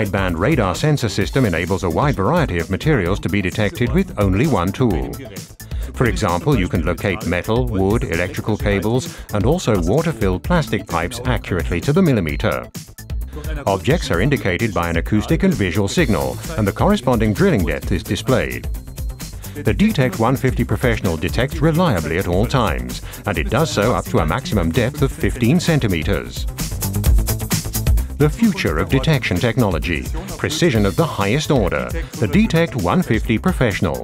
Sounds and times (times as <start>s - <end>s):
Speech: 0.0s - 12.7s, 13.4s - 18.6s, 19.6s - 26.5s, 28.2s - 34.0s
Music: 0.0s - 34.0s.